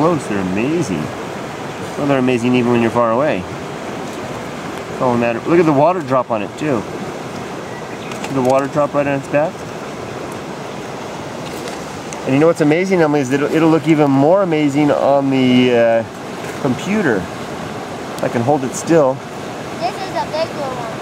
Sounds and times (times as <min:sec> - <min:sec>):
Rain: 0:00.0 - 0:21.0
Rustle: 0:00.0 - 0:21.0.